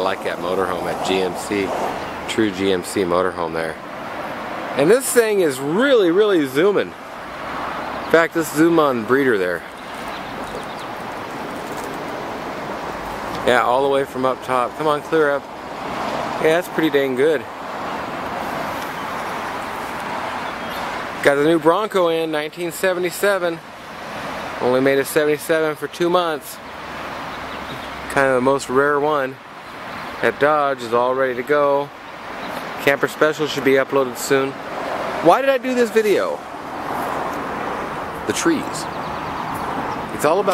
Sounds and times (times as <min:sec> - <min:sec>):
Speech: 0:00.0 - 0:03.8, 0:04.8 - 0:07.0, 0:08.1 - 0:09.7, 0:13.4 - 0:15.5, 0:16.4 - 0:17.5, 0:21.2 - 0:23.6, 0:24.6 - 0:26.6, 0:28.1 - 0:29.4, 0:30.2 - 0:32.0, 0:32.8 - 0:34.6, 0:35.2 - 0:36.4, 0:38.3 - 0:38.9, 0:40.1 - 0:40.5.